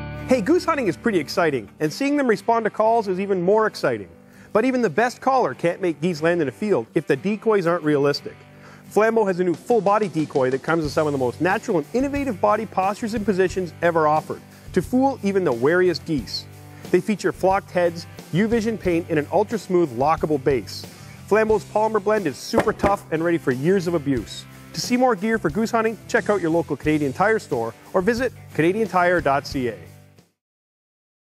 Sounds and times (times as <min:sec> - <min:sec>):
Music: 0:00.0 - 0:30.4
Speech: 0:00.3 - 0:29.9.